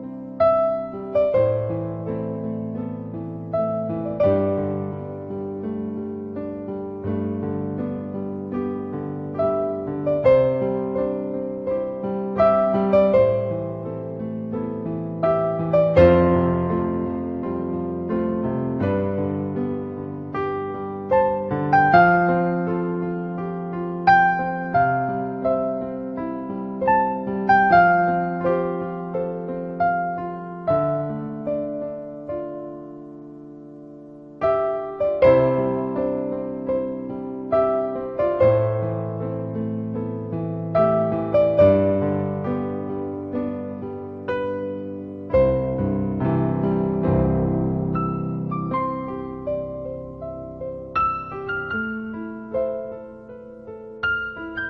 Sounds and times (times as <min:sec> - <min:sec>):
Music: 0:00.0 - 0:54.6.